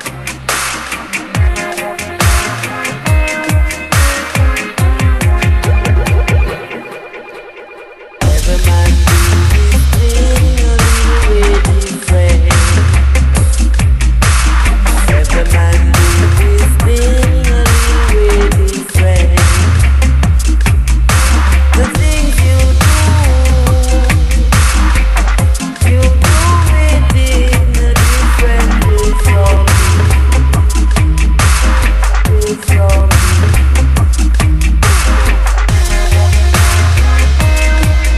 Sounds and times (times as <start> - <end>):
Dubstep: 0.0 - 38.1.